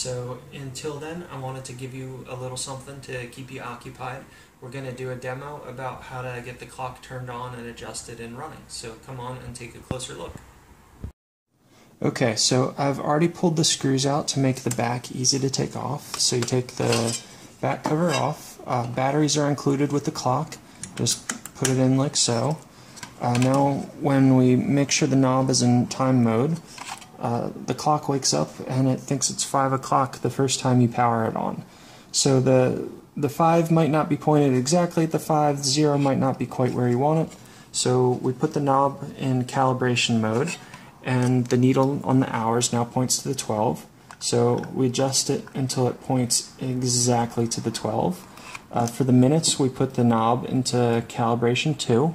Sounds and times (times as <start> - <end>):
Speech: 0.0 - 10.5, 12.0 - 52.1.